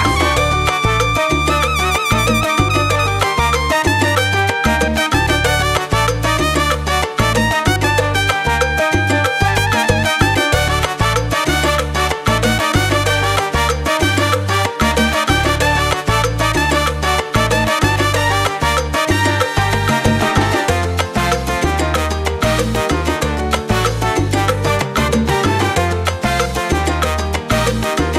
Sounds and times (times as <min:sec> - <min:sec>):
Salsa music: 0:00.0 - 0:28.1.